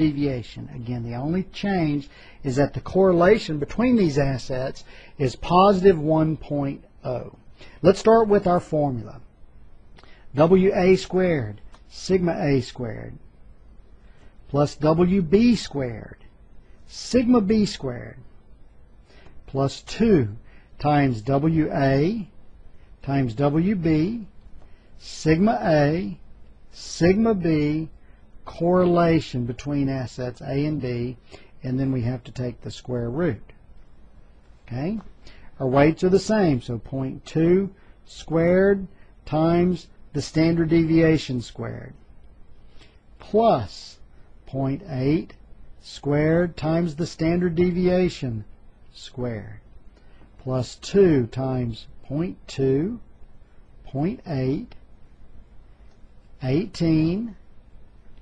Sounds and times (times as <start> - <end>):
Speech: 0.0 - 9.3, 10.3 - 13.3, 14.5 - 16.3, 16.9 - 18.3, 19.5 - 22.4, 23.0 - 24.4, 25.0 - 33.6, 34.6 - 42.1, 43.2 - 49.7, 50.4 - 53.1, 53.8 - 54.8, 56.4 - 57.4.